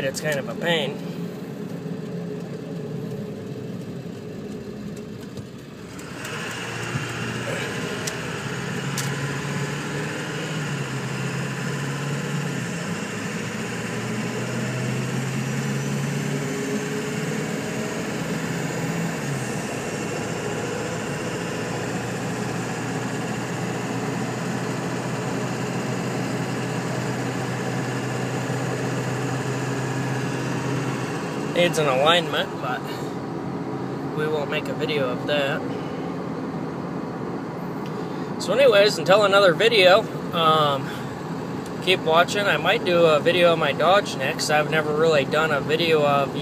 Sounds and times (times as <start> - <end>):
Car: 0.0 - 46.4
Idling: 0.0 - 46.4.